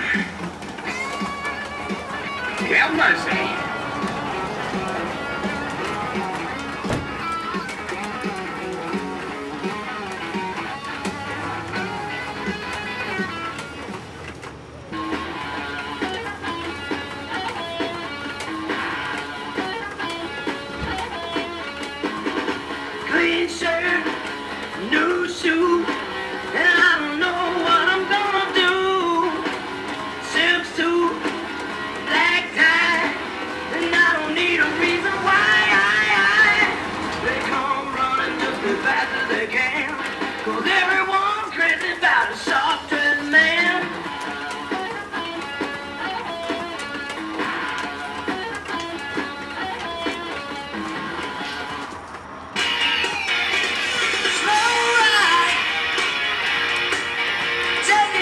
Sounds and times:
Music: 0.0s - 58.2s
Speech: 2.6s - 3.6s.

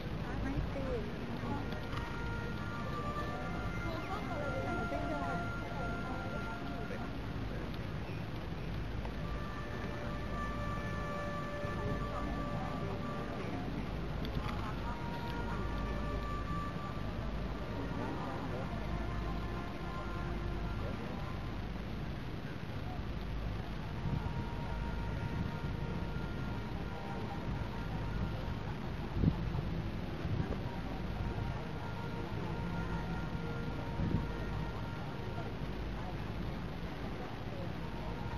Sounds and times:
Speech: 0.0s - 9.2s, 11.7s - 24.9s, 26.5s - 38.3s
Music: 0.0s - 38.3s
Outside, urban or manmade: 0.0s - 38.3s.

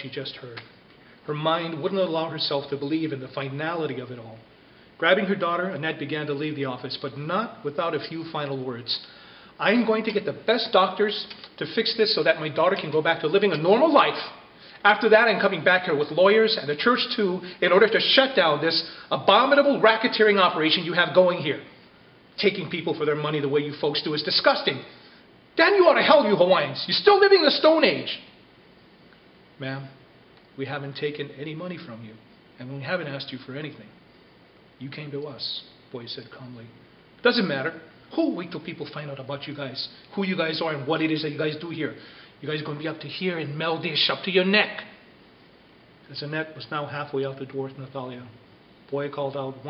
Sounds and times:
Speech: 0.0s - 21.8s, 22.4s - 24.9s, 25.6s - 28.4s, 29.6s - 30.0s, 30.6s - 34.0s, 34.8s - 45.0s, 46.1s - 49.7s
Inside, small room: 0.0s - 49.7s.

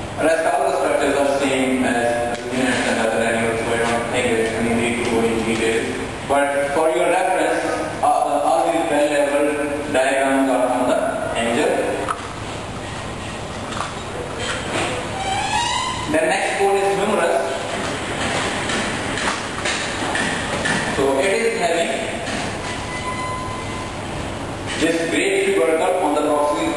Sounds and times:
Subway, metro, underground: 22.3s - 24.8s.

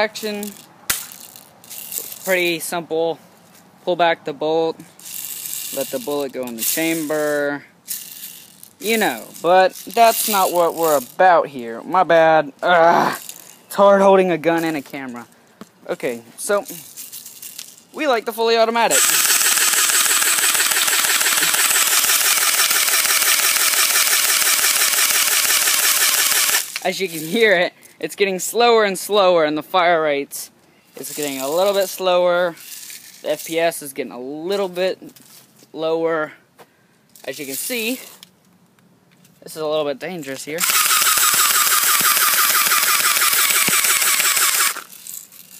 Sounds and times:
Speech: 0.0s - 0.6s, 2.2s - 3.2s, 3.8s - 4.8s, 5.7s - 7.7s, 8.8s - 16.8s, 18.0s - 19.0s, 26.8s - 32.6s, 33.2s - 35.2s, 35.8s - 36.4s, 37.2s - 38.2s, 39.4s - 40.6s.

